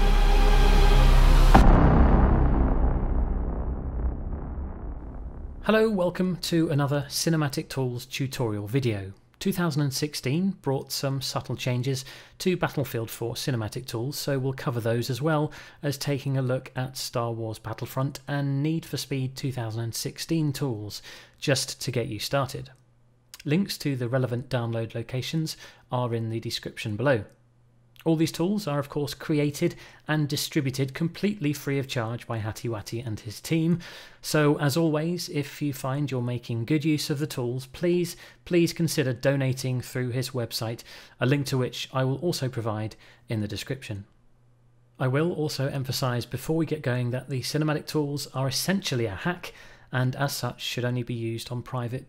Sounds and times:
Speech: 5.6 - 22.8, 23.4 - 27.4, 28.0 - 44.2, 45.0 - 52.0.

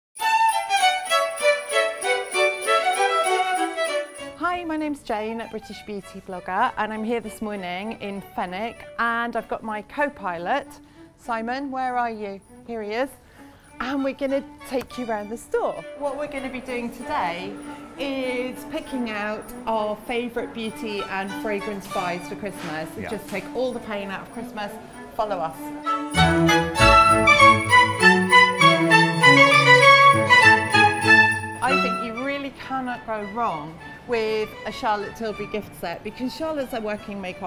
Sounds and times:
Violin, fiddle: 0.2 - 4.4, 24.8 - 32.5
Speech: 4.4 - 13.2, 13.8 - 25.6, 31.6 - 37.4.

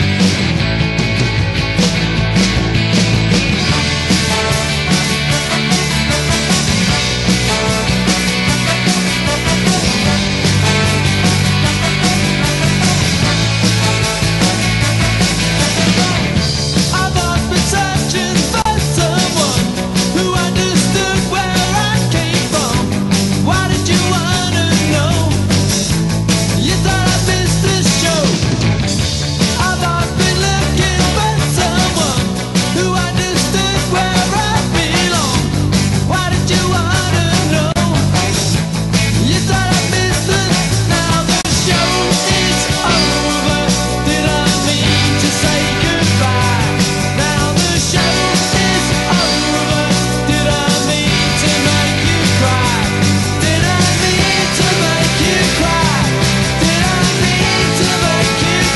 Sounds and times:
Music: 0.0 - 58.7.

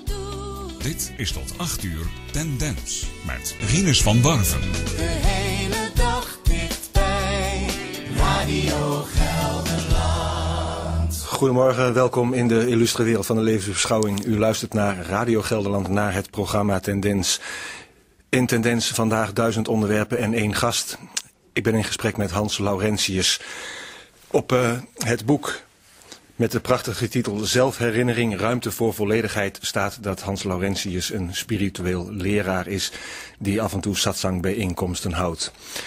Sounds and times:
Speech: 0.8 - 4.7, 11.2 - 17.4, 18.3 - 23.4, 24.3 - 25.7, 26.4 - 35.6.

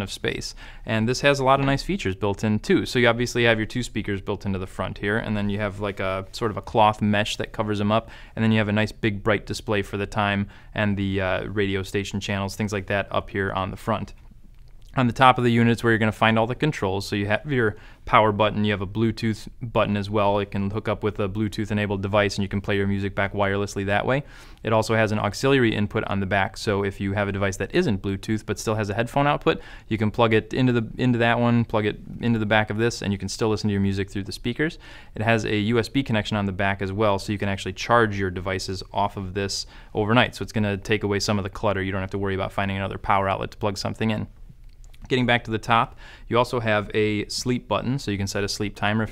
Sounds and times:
Speech: 0.0 - 14.2, 14.9 - 44.3, 45.0 - 49.1.

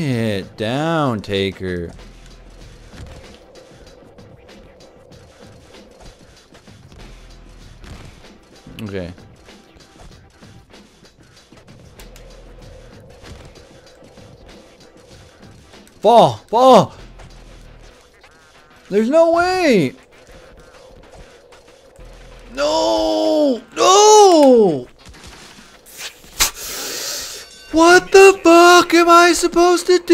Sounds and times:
Speech: 0.0 - 2.0, 8.7 - 9.2, 16.0 - 17.0, 18.9 - 20.0, 22.5 - 24.9, 27.7 - 30.1.

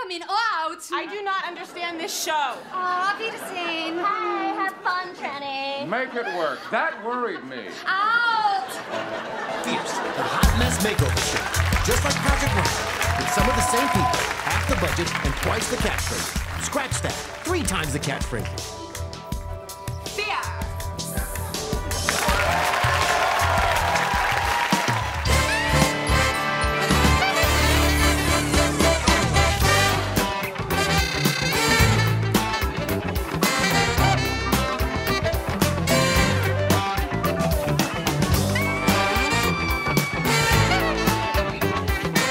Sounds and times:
Laughter: 5.8 - 7.9, 8.5 - 11.6.

